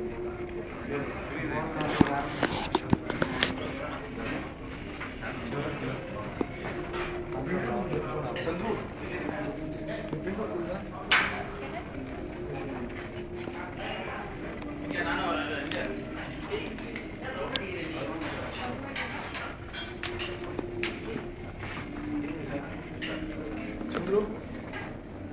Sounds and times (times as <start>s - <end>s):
Music: 0.0s - 25.3s
Speech: 7.3s - 19.6s.